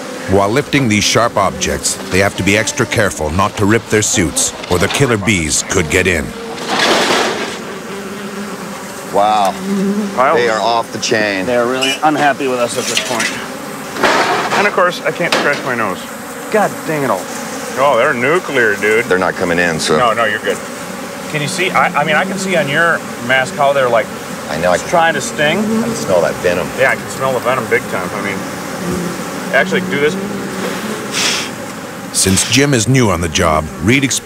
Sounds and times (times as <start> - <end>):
Bee, wasp, etc.: 0.0 - 34.2
Fly, housefly: 0.0 - 34.2.